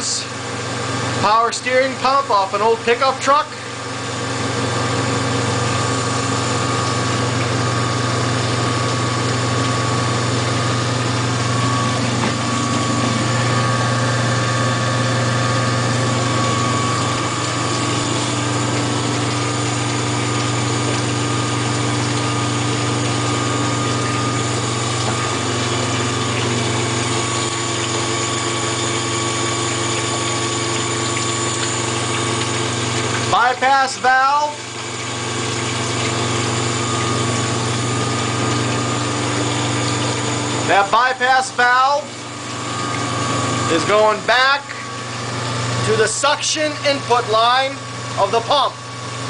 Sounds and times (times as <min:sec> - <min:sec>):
Speech: 0:00.0 - 0:00.3, 0:01.2 - 0:03.6, 0:33.3 - 0:34.6, 0:40.7 - 0:42.2, 0:43.7 - 0:44.8, 0:45.8 - 0:48.8.